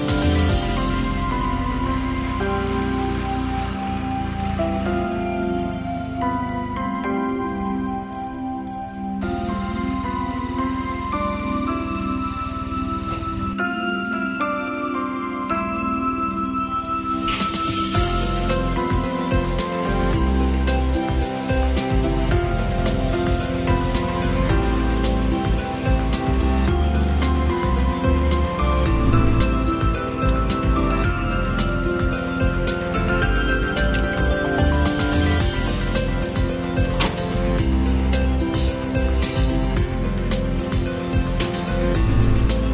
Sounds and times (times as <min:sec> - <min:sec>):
Music: 0:00.0 - 0:42.7.